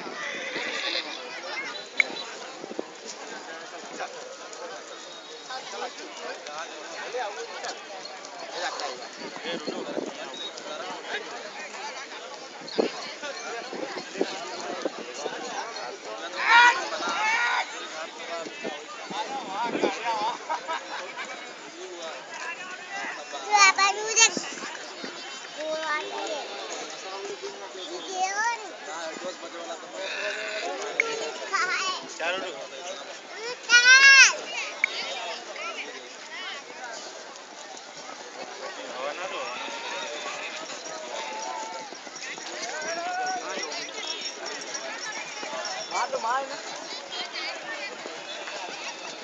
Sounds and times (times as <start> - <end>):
Clip-clop: 0.0 - 49.2
Speech: 0.8 - 49.2.